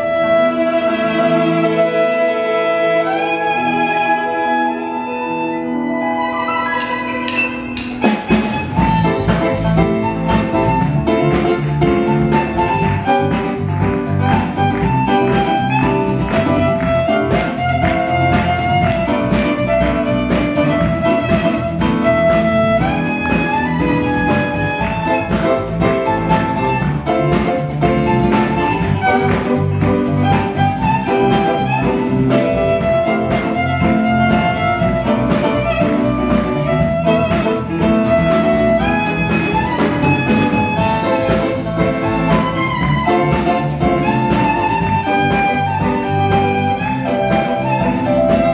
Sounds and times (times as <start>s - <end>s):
Violin, fiddle: 0.0s - 7.3s, 8.2s - 48.5s.